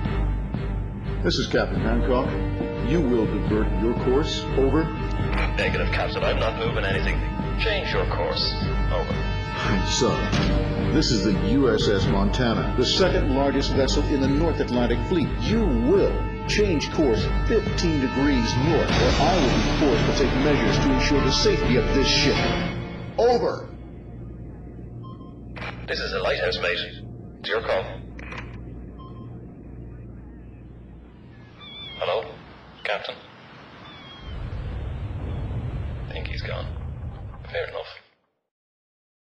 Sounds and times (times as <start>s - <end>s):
Music: 0.0s - 31.5s
Speech: 1.3s - 10.4s, 11.0s - 22.4s, 25.9s - 28.0s, 32.0s - 33.2s, 36.1s - 36.7s, 37.5s - 38.0s.